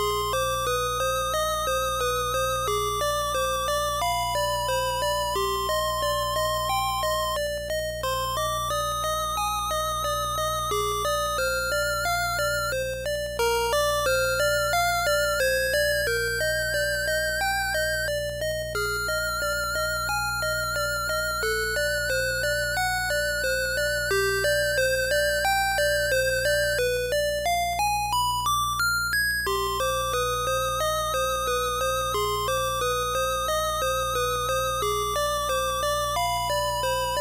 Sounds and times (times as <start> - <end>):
Music: 0.0 - 37.2.